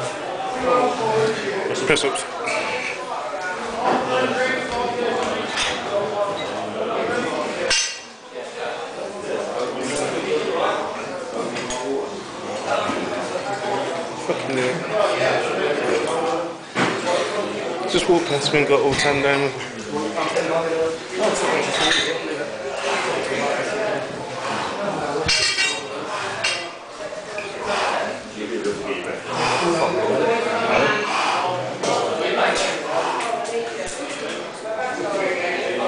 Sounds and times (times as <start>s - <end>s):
Speech: 0.0s - 35.8s.